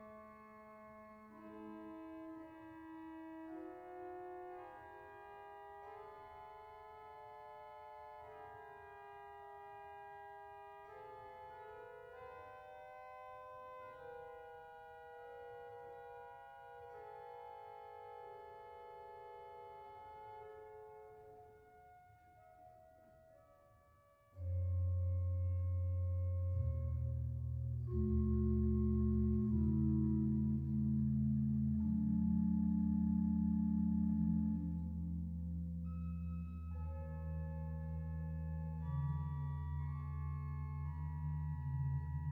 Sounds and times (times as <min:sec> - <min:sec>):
Classical music: 0:24.5 - 0:42.3.